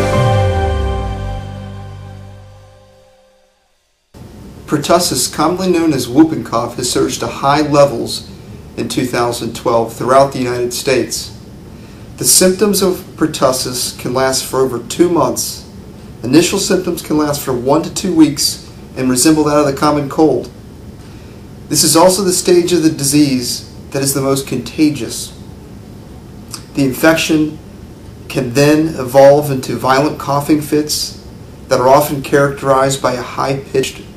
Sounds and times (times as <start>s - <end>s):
Speech: 4.7s - 11.4s, 12.2s - 20.6s, 21.7s - 25.4s, 26.5s - 27.6s, 28.3s - 34.1s.